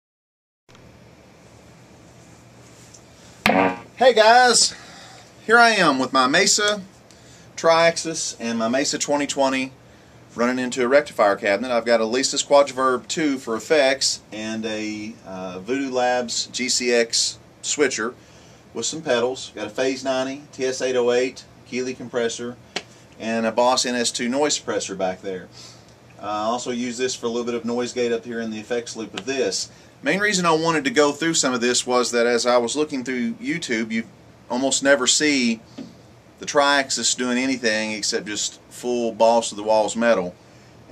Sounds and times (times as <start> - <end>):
Speech: 4.0 - 4.8, 5.4 - 6.9, 7.6 - 18.2, 18.8 - 22.6, 23.2 - 25.5, 26.2 - 35.6, 36.4 - 40.4.